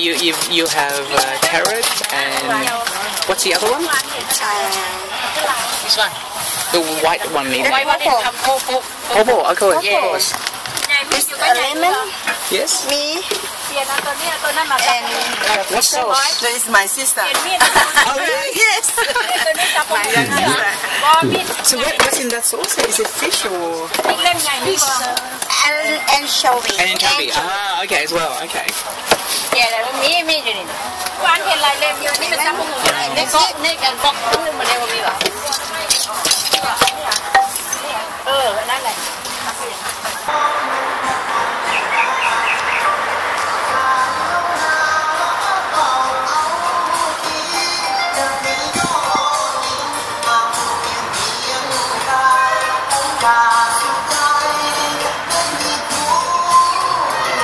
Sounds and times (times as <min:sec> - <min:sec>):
Speech: 0:19.9 - 0:22.2.